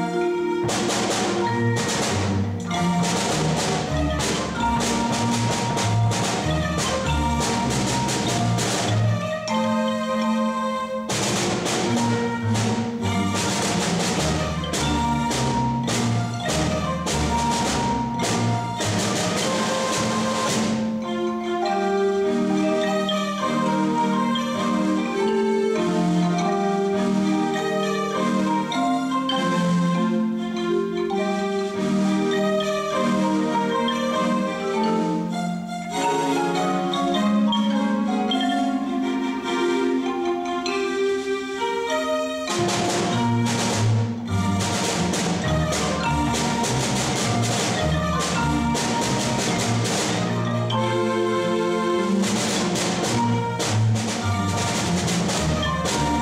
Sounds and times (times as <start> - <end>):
Marimba, xylophone: 0.0 - 56.2
Glockenspiel: 1.2 - 56.2.